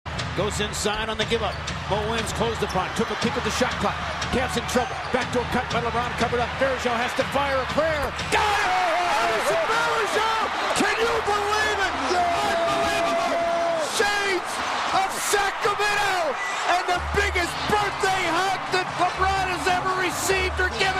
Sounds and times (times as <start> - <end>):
Speech: 0.3 - 20.9.